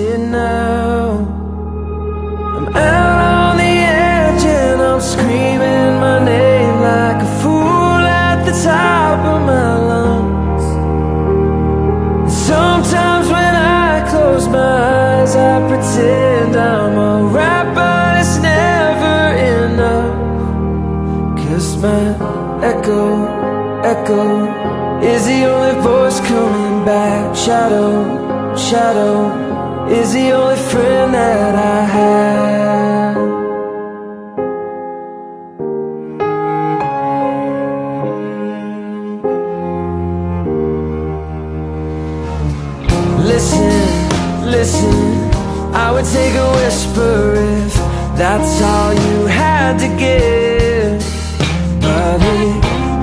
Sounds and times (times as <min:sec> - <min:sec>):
Music: 0:00.0 - 0:53.0.